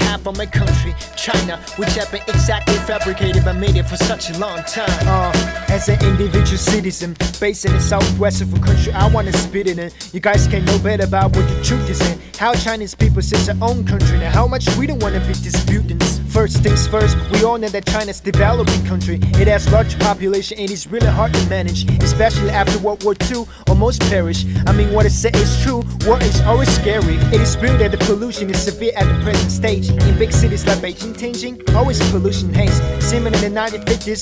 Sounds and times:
Music: 0.0 - 34.2.

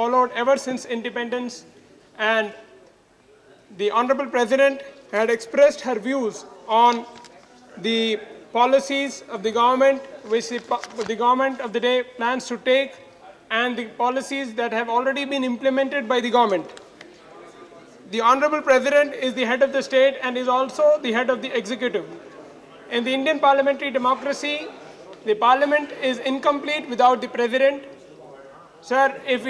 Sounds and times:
Male speech, man speaking: 0.0 - 2.7, 3.3 - 29.4
Narration, monologue: 0.0 - 29.4.

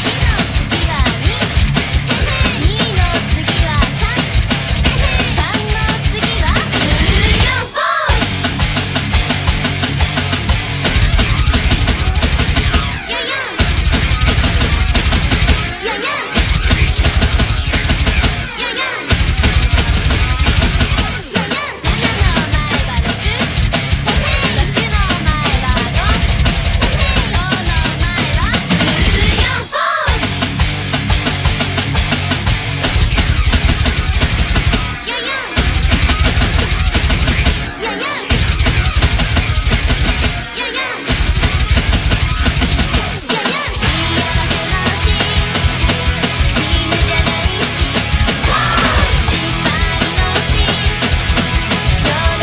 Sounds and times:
Drum: 0.0 - 52.4
Drum kit: 0.0 - 52.4.

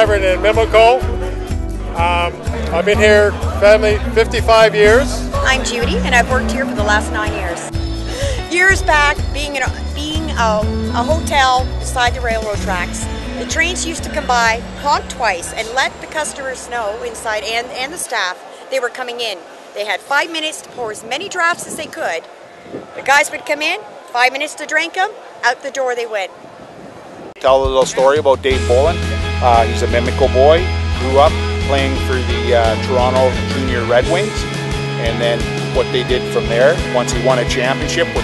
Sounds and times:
Music: 0.0 - 17.4, 27.4 - 38.2.

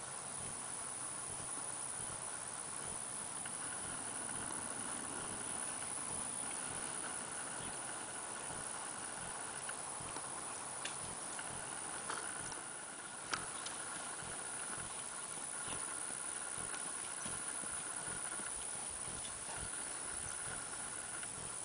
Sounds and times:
Clip-clop: 0.0 - 21.6.

